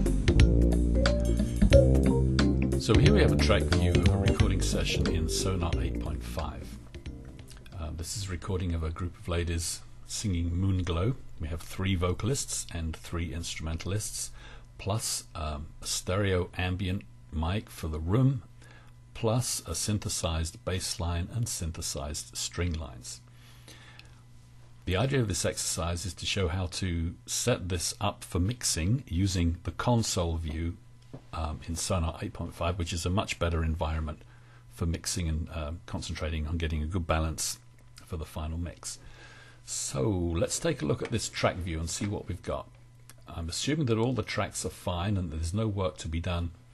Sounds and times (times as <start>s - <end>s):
Speech: 2.8s - 6.8s, 7.7s - 18.5s, 19.2s - 23.3s, 24.9s - 34.2s, 34.8s - 39.0s, 39.7s - 46.6s.